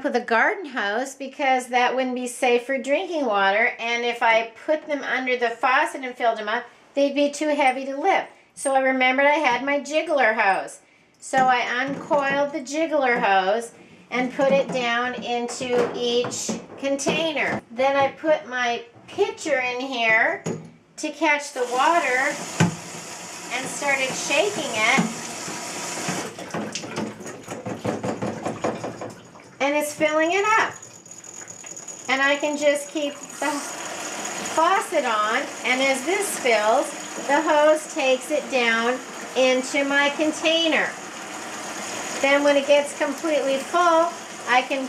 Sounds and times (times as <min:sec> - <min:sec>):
Water tap, faucet: 0:21.5 - 0:29.6, 0:30.7 - 0:44.8
Water: 0:21.6 - 0:32.2, 0:33.0 - 0:44.8.